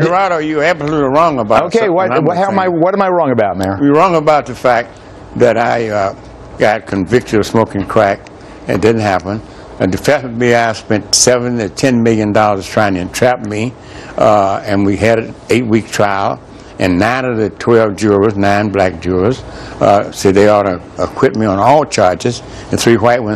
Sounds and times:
Speech: 0.0s - 23.3s.

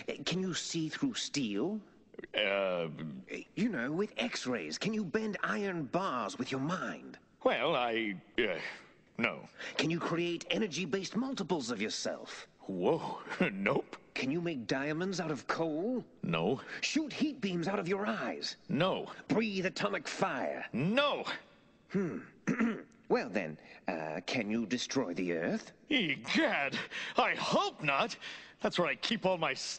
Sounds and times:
Speech: 0.0s - 22.4s, 23.1s - 29.7s.

